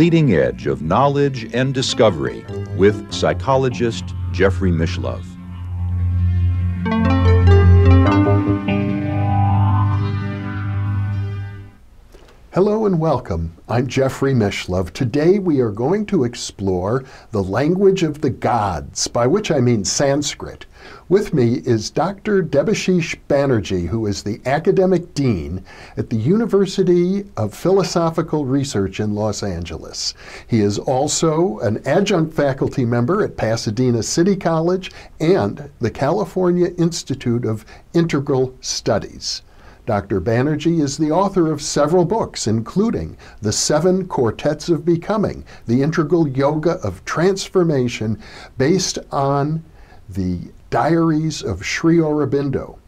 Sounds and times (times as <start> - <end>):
Speech: 0.0 - 5.3, 12.6 - 52.8.